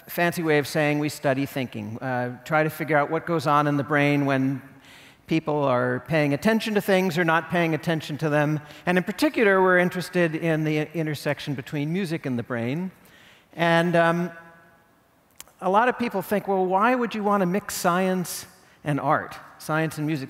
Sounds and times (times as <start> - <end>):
Speech: 0.0 - 4.7, 5.3 - 13.0, 13.6 - 14.3, 15.4 - 20.2.